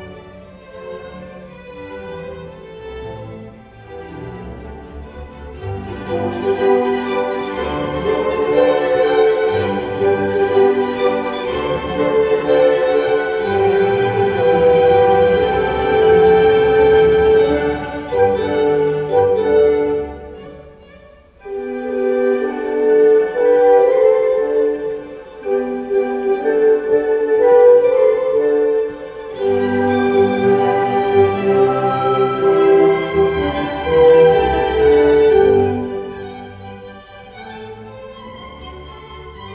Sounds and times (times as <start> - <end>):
Violin, fiddle: 0.0 - 39.5.